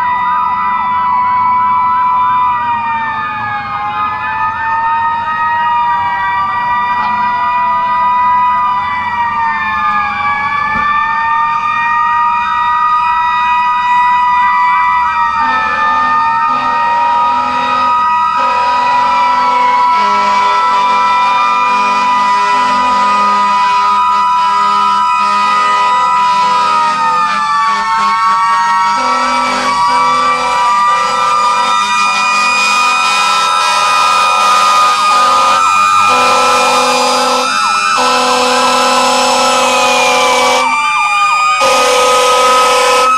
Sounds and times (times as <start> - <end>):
Fire engine, fire truck (siren): 0.0 - 43.1.